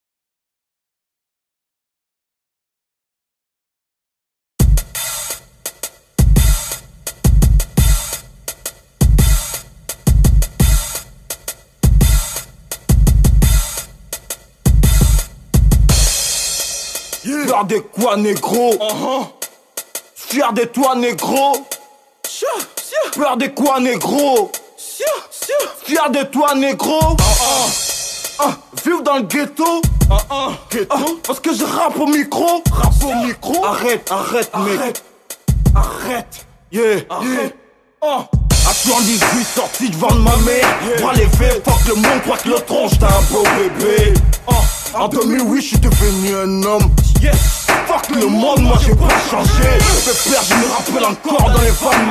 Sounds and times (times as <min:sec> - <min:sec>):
Music: 0:04.6 - 0:36.8, 0:38.4 - 0:52.1.